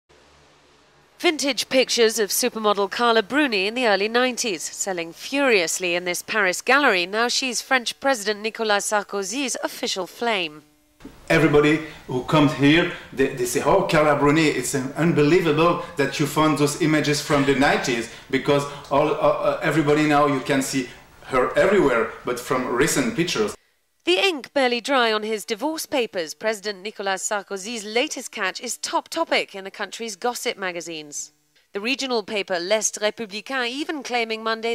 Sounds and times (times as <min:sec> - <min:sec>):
Speech: 0:01.2 - 0:10.6, 0:11.3 - 0:34.7.